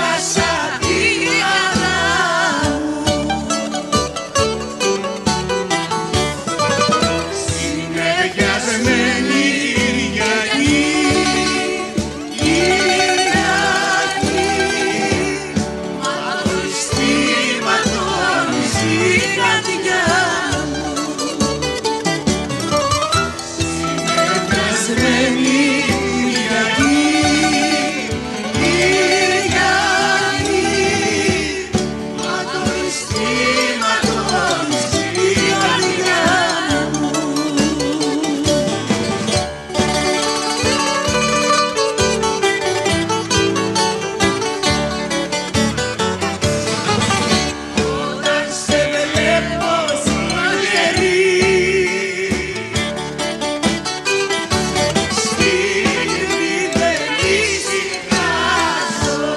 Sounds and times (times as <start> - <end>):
Singing: 7.4 - 21.3, 24.1 - 38.4, 47.8 - 52.8, 55.2 - 59.3.